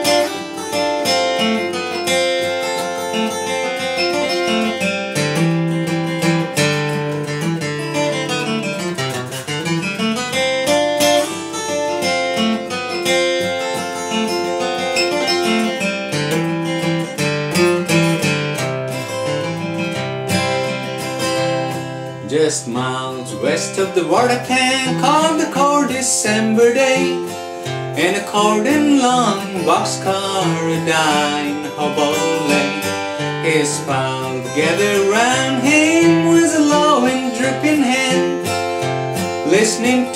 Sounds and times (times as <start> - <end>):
Music: 0.0 - 40.1
Male singing: 22.2 - 27.4, 28.0 - 38.5, 39.4 - 40.1.